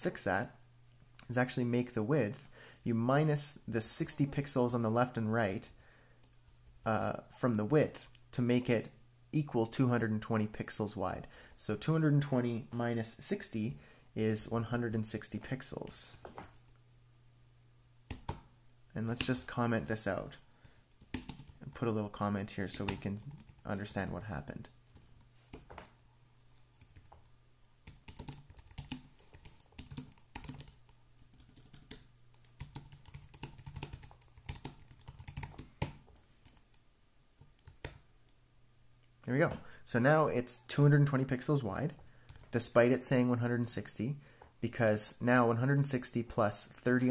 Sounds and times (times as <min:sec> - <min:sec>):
Speech: 0:00.0 - 0:00.6, 0:01.2 - 0:05.8, 0:06.8 - 0:16.2, 0:19.0 - 0:20.4, 0:21.6 - 0:24.8, 0:39.2 - 0:47.1
Inside, small room: 0:00.0 - 0:47.1.